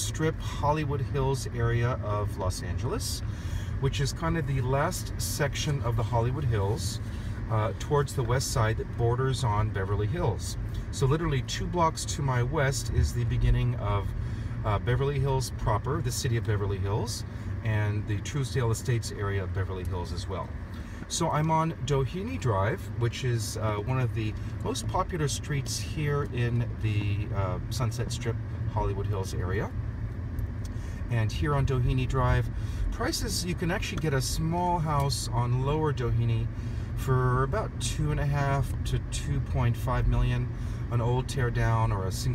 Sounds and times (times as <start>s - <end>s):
Speech: 0.0s - 3.2s, 3.8s - 29.8s, 31.1s - 42.3s.